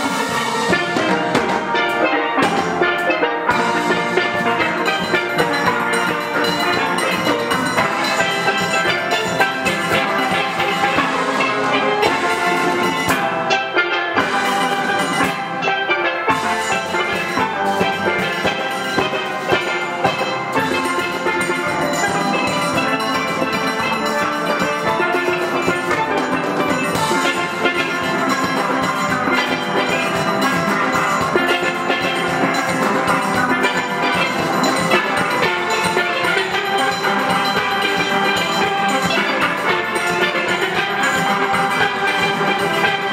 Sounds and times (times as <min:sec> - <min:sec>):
Steelpan: 0:00.0 - 0:43.1.